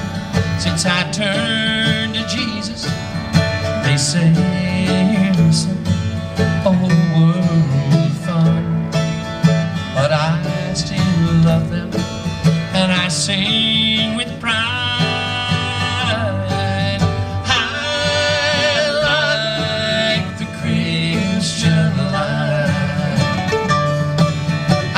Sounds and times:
Guitar: 0.0s - 24.9s.

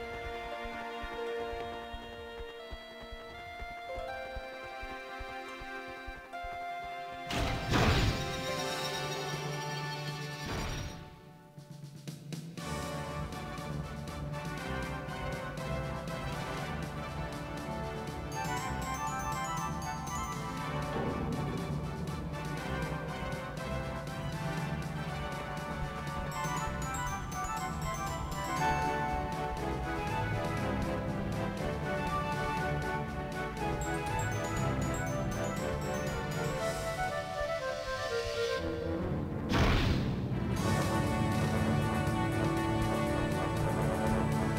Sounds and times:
Music: 0.0s - 44.5s.

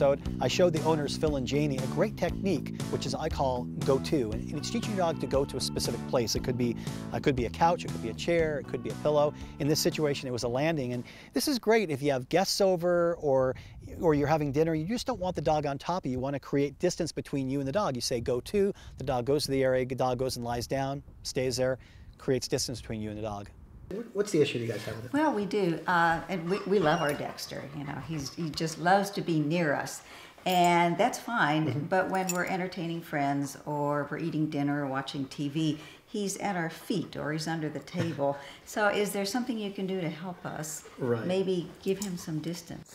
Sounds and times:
Dog: 26.3s - 28.8s.

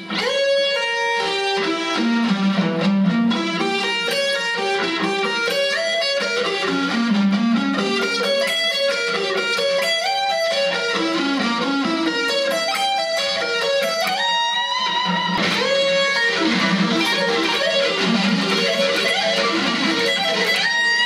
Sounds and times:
Electric guitar: 0.0s - 21.0s.

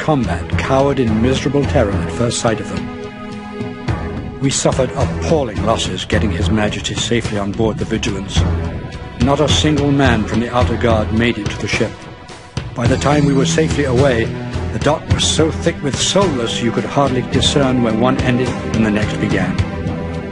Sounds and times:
Music: 0.0s - 20.3s
Narration, monologue: 0.0s - 20.3s.

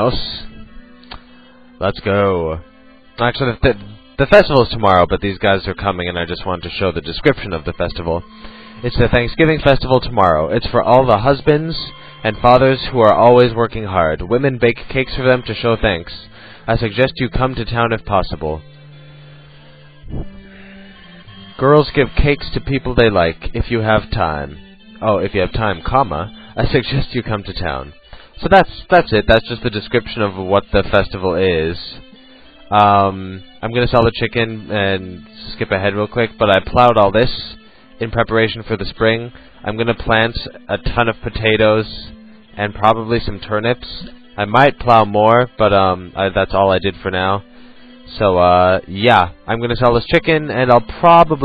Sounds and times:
Speech: 0.0s - 0.6s, 1.8s - 2.6s, 3.2s - 8.2s, 8.8s - 18.6s, 21.6s - 32.0s, 32.7s - 47.4s, 48.1s - 51.4s
Music: 0.0s - 51.4s.

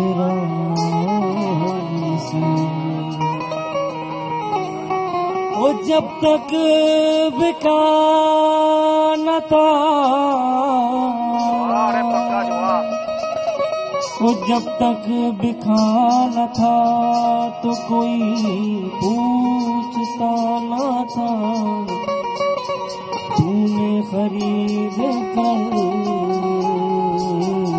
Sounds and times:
Male singing: 0.0s - 3.0s, 5.5s - 12.8s, 14.2s - 22.0s, 23.4s - 27.7s
Music: 0.0s - 27.7s.

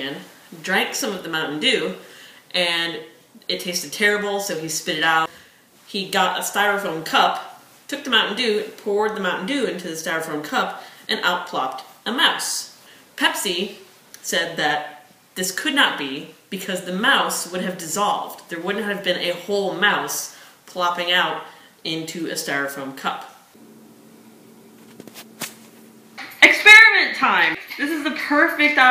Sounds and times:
Speech: 0.0s - 5.3s, 5.9s - 23.4s, 26.2s - 28.9s.

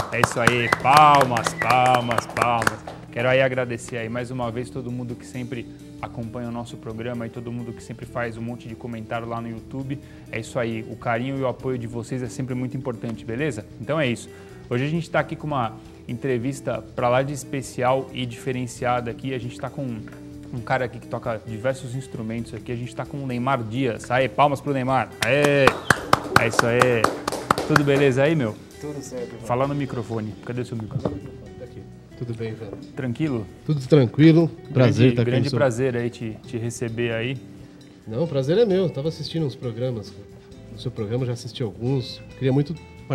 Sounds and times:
Music: 0.0s - 43.1s.

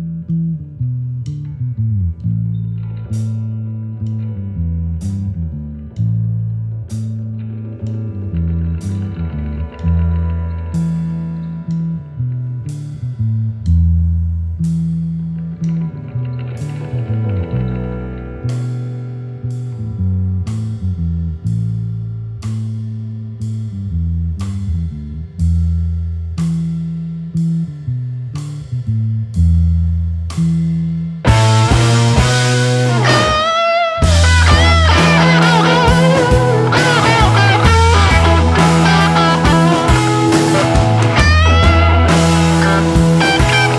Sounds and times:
Music: 0.0s - 43.7s.

